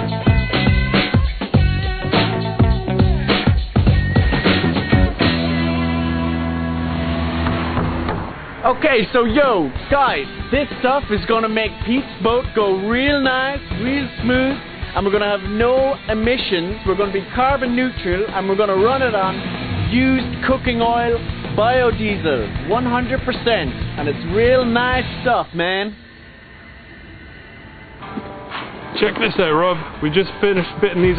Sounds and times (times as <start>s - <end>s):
Music: 0.0s - 8.3s, 9.2s - 31.1s
Vehicle: 6.1s - 9.2s, 18.8s - 25.4s
Speech: 8.6s - 26.0s, 29.0s - 31.1s.